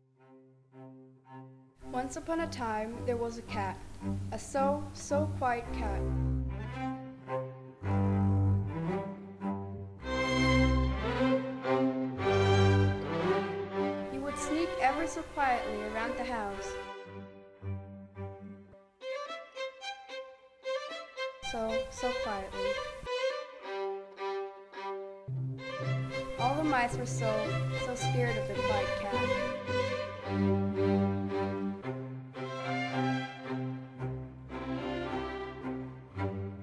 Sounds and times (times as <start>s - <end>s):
Music: 0.0s - 36.6s
Speech: 1.9s - 6.0s, 14.1s - 16.8s, 21.5s - 22.5s, 26.4s - 29.4s.